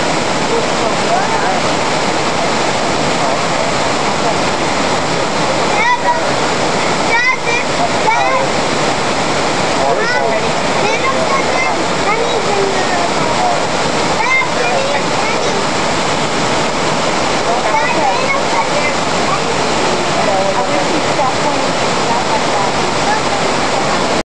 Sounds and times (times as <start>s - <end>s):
Waterfall: 0.0s - 24.2s.